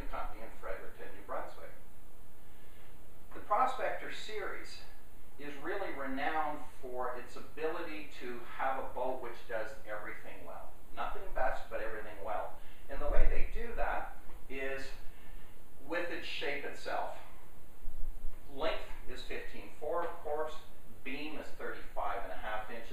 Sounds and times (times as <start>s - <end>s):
Speech: 0.0s - 1.8s, 3.3s - 15.0s, 15.8s - 17.3s, 18.5s - 22.9s.